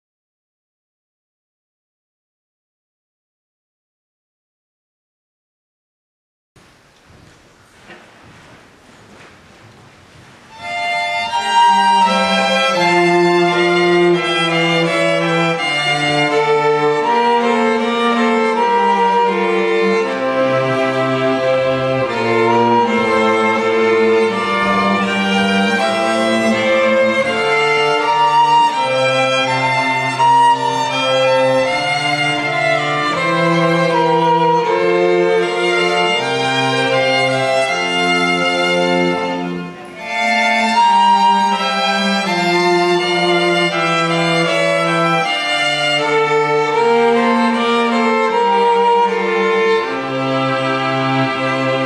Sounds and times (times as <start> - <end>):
Violin, fiddle: 10.2 - 51.8.